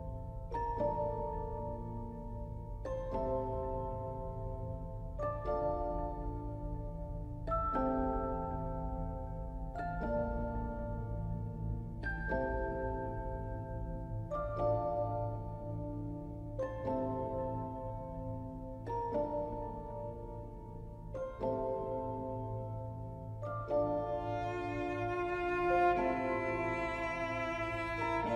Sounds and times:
Music: 0.0s - 28.3s.

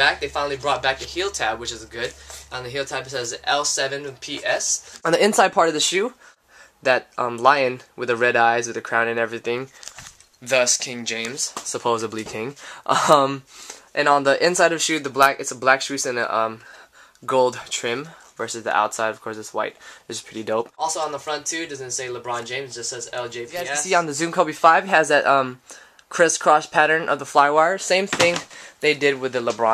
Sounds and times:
Speech: 0.0s - 6.2s, 6.8s - 9.7s, 10.4s - 16.6s, 17.2s - 29.7s.

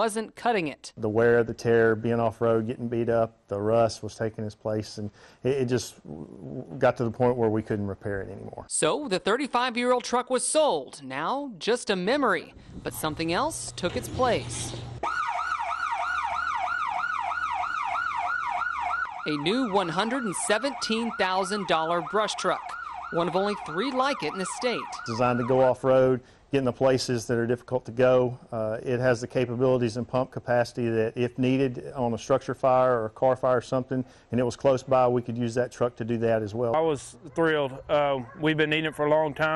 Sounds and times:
Speech: 0.0s - 9.0s, 25.1s - 39.5s.

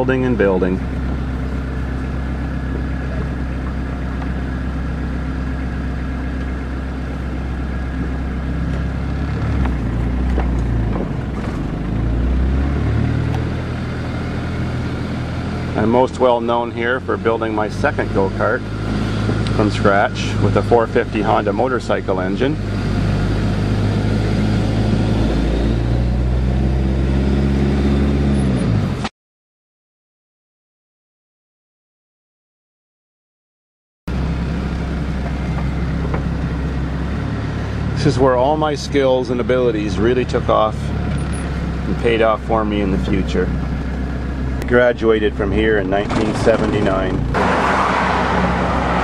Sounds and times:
Car: 0.0s - 29.1s, 34.1s - 49.0s
Outside, urban or manmade: 0.0s - 29.2s, 34.1s - 49.0s.

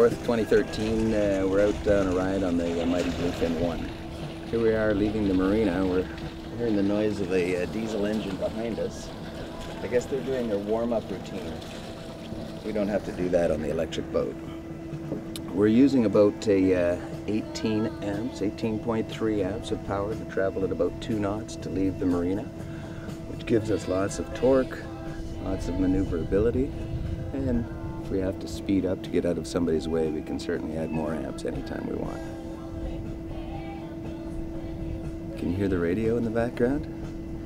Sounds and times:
Speech: 0.0s - 3.9s, 4.5s - 9.1s, 9.8s - 11.6s, 12.7s - 14.4s, 15.4s - 22.5s, 23.3s - 24.8s, 25.4s - 26.7s, 27.4s - 32.2s, 35.4s - 36.9s
Motorboat, speedboat: 0.0s - 37.4s
Music: 0.0s - 37.4s.

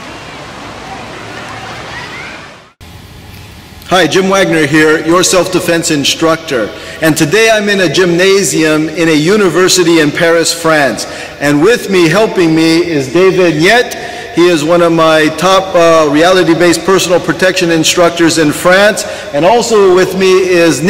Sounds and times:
Speech: 3.9s - 20.8s.

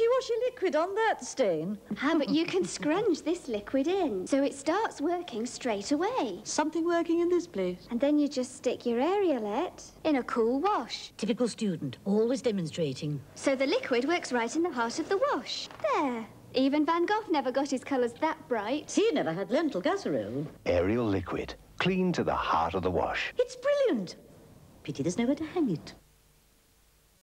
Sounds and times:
Speech: 0.0s - 24.2s, 24.9s - 26.0s.

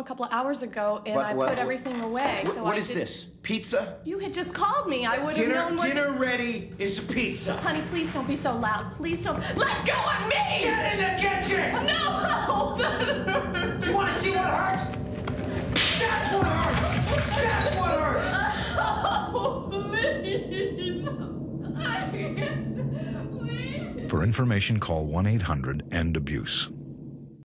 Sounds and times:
Speech: 23.5s - 26.7s.

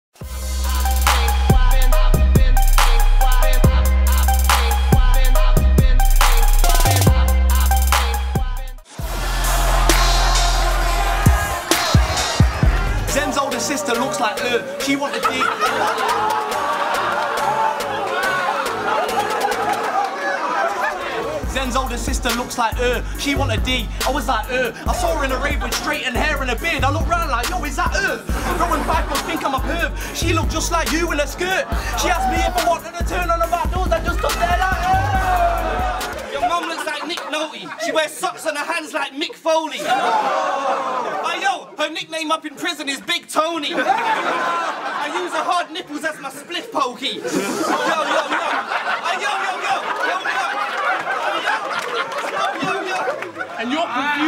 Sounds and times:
Hip hop music: 0.2s - 39.3s
Rapping: 0.6s - 8.8s, 9.9s - 15.8s, 21.4s - 37.5s.

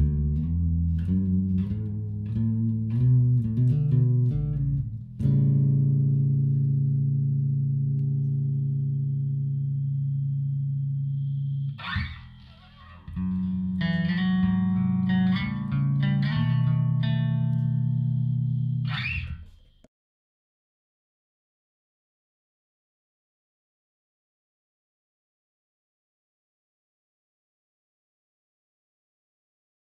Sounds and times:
Plucked string instrument: 0.0s - 9.0s, 11.7s - 19.6s
Effects unit: 0.0s - 19.9s.

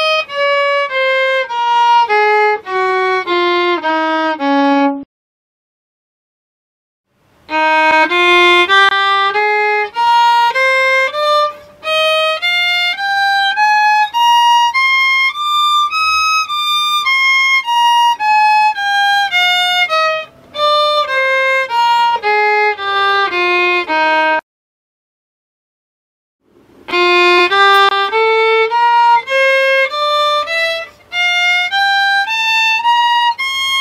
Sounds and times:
Violin, fiddle: 0.0s - 5.1s, 7.4s - 24.4s, 26.8s - 33.8s.

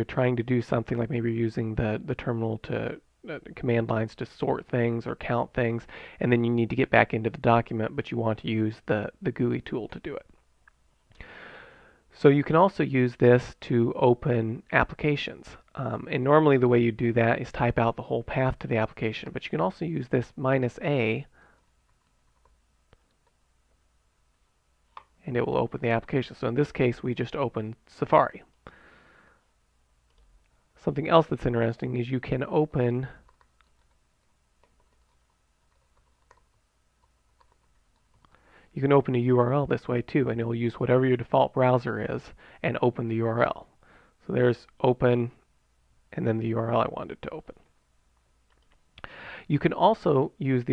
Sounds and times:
Speech: 0.0s - 10.4s, 12.2s - 21.3s, 25.2s - 28.5s, 30.8s - 33.2s, 38.8s - 45.4s, 46.1s - 47.7s, 49.5s - 50.7s.

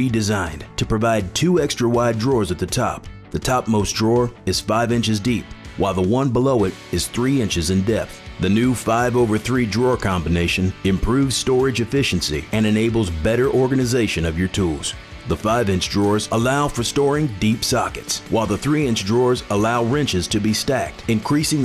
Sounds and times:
Music: 0.0s - 21.6s
Speech: 0.0s - 21.6s.

